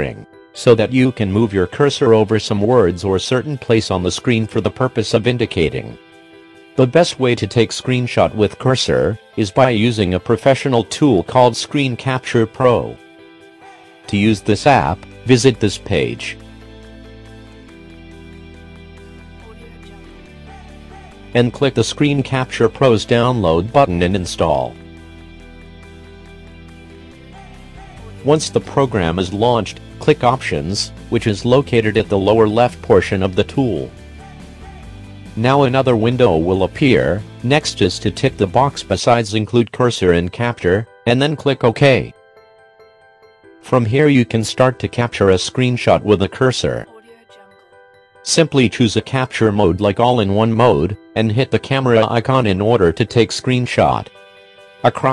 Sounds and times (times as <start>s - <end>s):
Speech: 0.0s - 6.0s, 6.8s - 13.0s, 14.1s - 16.4s, 19.4s - 20.2s, 21.4s - 24.8s, 27.9s - 34.0s, 35.4s - 42.2s, 43.7s - 47.6s, 48.3s - 54.1s, 54.9s - 55.1s
Music: 0.0s - 55.1s.